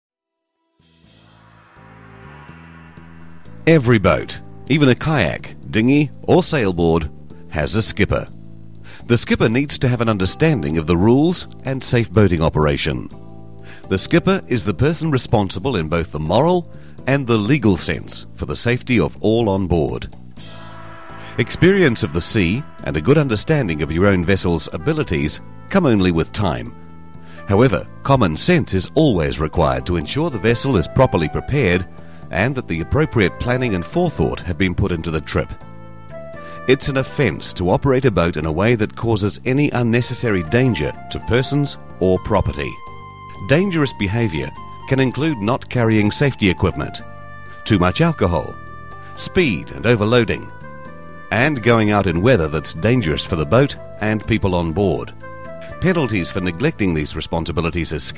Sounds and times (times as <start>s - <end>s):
Music: 0.0s - 58.1s
Speech: 3.7s - 8.3s, 9.1s - 13.1s, 13.9s - 20.1s, 21.4s - 26.7s, 27.5s - 35.6s, 36.7s - 42.8s, 43.4s - 47.0s, 47.6s - 48.6s, 49.2s - 50.5s, 51.3s - 55.1s, 55.7s - 58.1s.